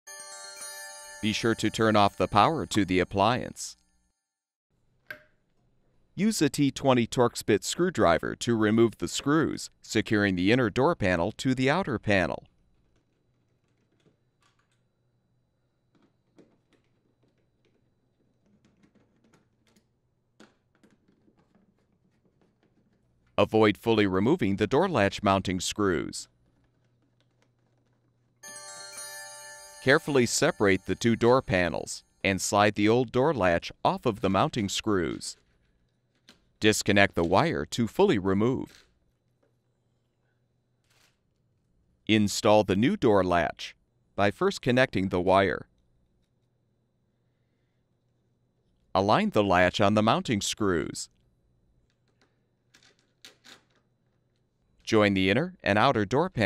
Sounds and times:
Speech: 1.2s - 3.8s, 6.2s - 12.5s, 23.4s - 26.3s, 29.8s - 35.4s, 36.6s - 38.8s, 42.1s - 45.7s, 49.0s - 51.1s, 54.9s - 56.4s.

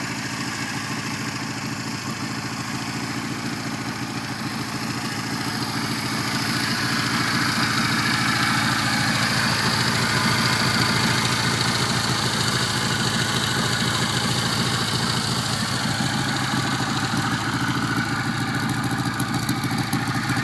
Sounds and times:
Motorcycle: 0.0s - 20.4s
Outside, rural or natural: 0.0s - 20.4s.

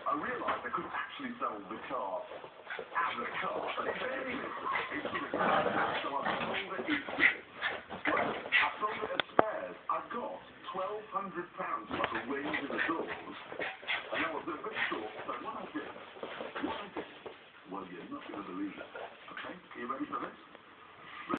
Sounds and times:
Speech: 0.0s - 2.4s, 3.0s - 7.4s, 8.0s - 16.0s, 17.7s - 20.5s.

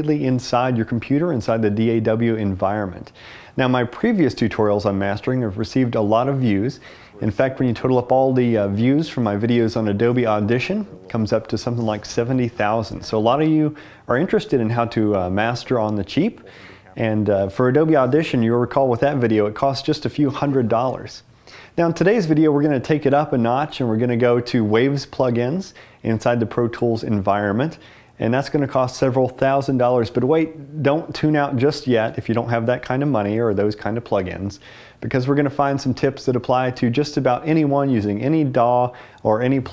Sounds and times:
Speech: 0.0s - 39.7s.

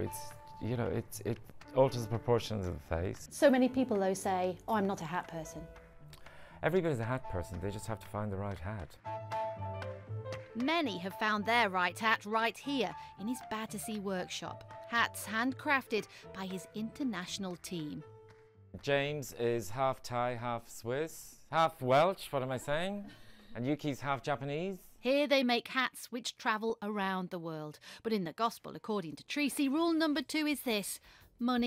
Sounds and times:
Speech: 0.0s - 5.6s, 6.6s - 8.9s, 18.8s - 23.0s, 23.6s - 31.6s
Music: 0.0s - 23.5s, 29.4s - 31.6s.

